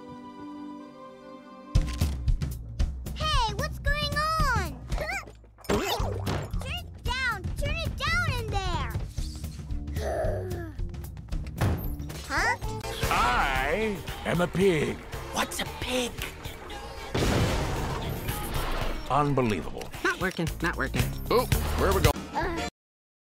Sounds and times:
Music: 0.0s - 22.7s.

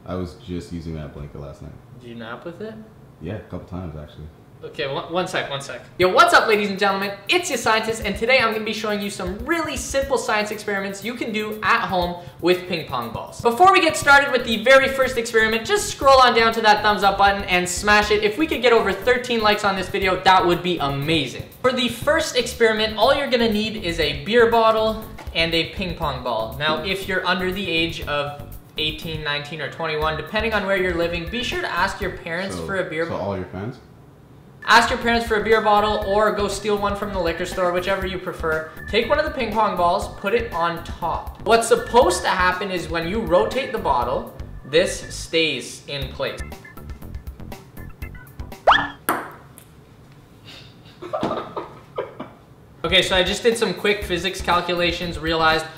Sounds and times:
Speech: 0.0s - 33.8s, 34.6s - 46.4s, 52.8s - 55.7s
Music: 6.3s - 32.8s, 34.6s - 49.0s, 52.9s - 55.7s.

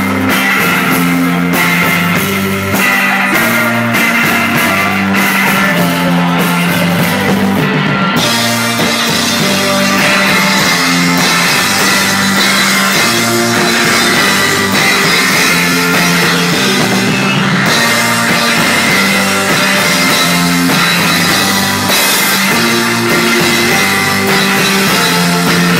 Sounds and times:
Guitar: 0.0s - 25.7s.

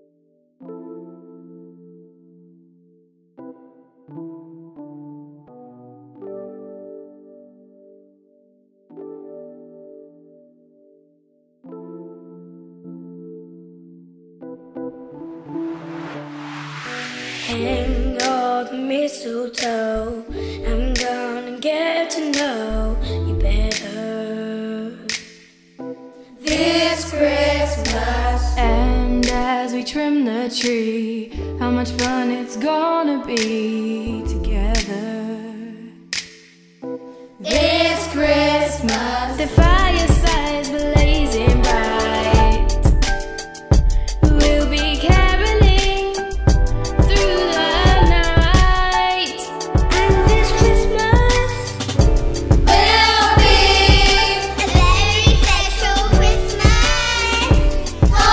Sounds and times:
Choir: 26.4s - 29.5s, 37.4s - 42.7s, 47.1s - 48.3s, 52.6s - 57.5s, 58.1s - 58.3s.

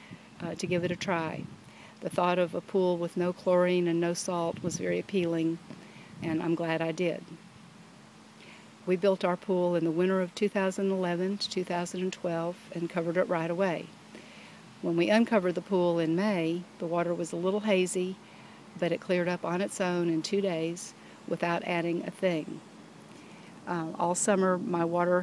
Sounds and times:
Speech: 0.4s - 1.4s, 2.0s - 5.6s, 6.2s - 7.4s, 8.9s - 13.9s, 14.8s - 18.2s, 18.8s - 22.6s, 23.7s - 25.2s.

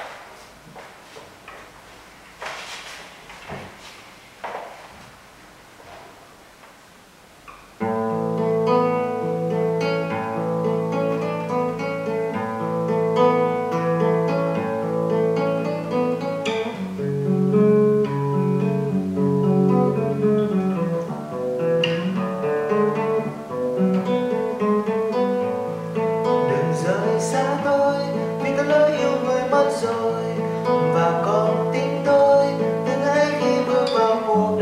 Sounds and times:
Acoustic guitar: 0.0s - 6.7s, 7.4s - 34.6s
Strum: 7.5s - 34.6s.

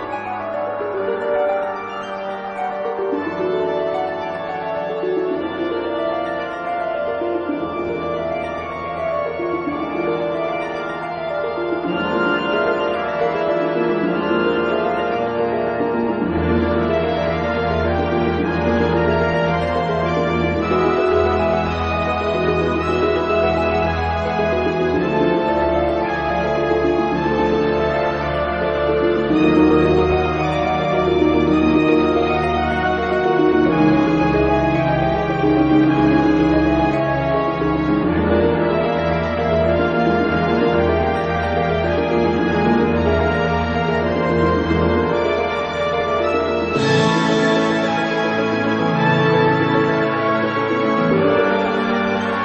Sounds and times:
Music: 0.0s - 52.4s.

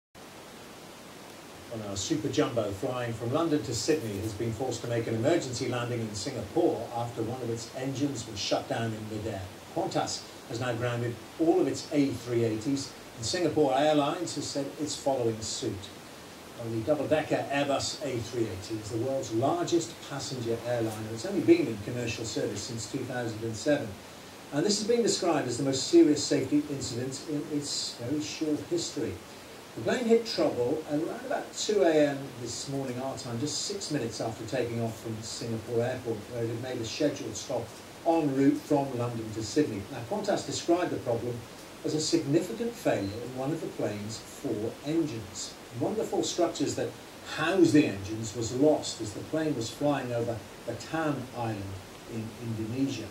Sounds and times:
Speech: 1.7s - 16.0s, 16.6s - 53.1s.

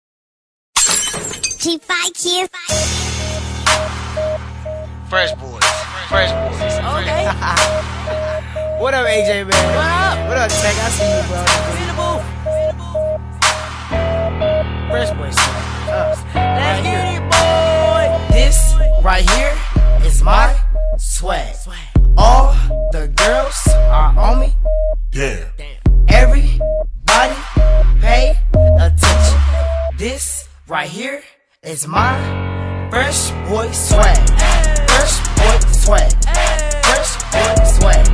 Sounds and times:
Shatter: 0.8s - 1.6s
Music: 2.7s - 30.6s, 31.9s - 38.1s
Speech: 5.1s - 7.3s, 8.8s - 12.2s, 14.9s - 17.2s, 25.2s - 26.5s, 30.0s - 32.1s.

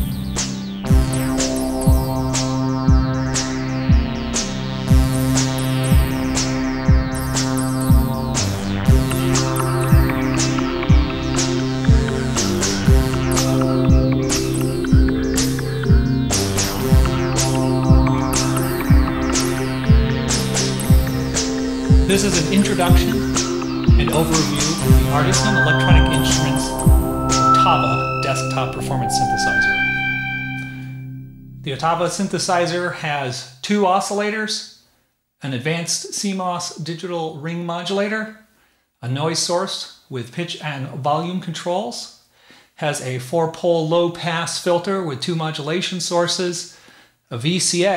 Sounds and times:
Sampler: 0.0s - 32.8s
Speech: 22.1s - 23.3s, 24.0s - 26.8s, 27.6s - 29.8s, 31.6s - 34.8s, 35.4s - 38.4s, 39.0s - 42.2s, 42.8s - 47.9s.

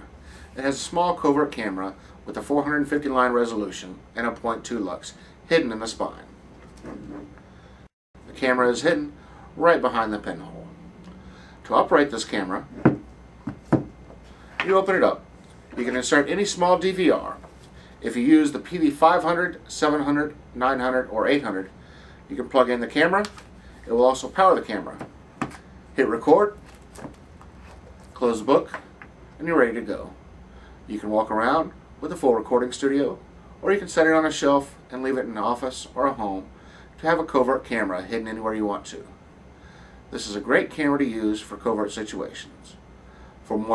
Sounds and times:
Speech: 0.6s - 6.3s, 8.3s - 10.7s, 11.6s - 12.7s, 14.6s - 15.2s, 15.8s - 17.4s, 18.0s - 25.1s, 26.0s - 26.6s, 28.2s - 28.8s, 29.4s - 30.2s, 30.9s - 39.2s, 40.1s - 42.8s, 43.5s - 43.7s.

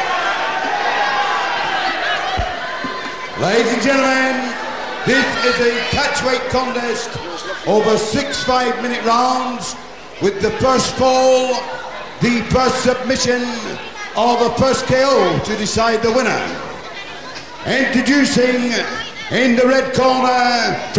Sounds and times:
Speech: 3.4s - 20.9s.

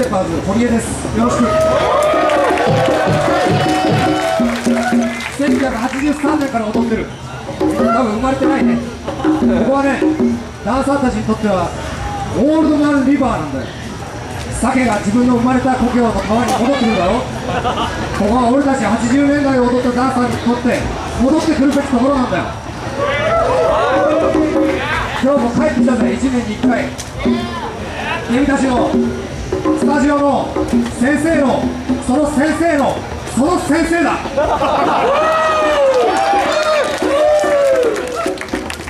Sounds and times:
Music: 2.4s - 5.6s, 6.8s - 10.7s, 23.2s - 33.2s, 37.0s - 38.8s.

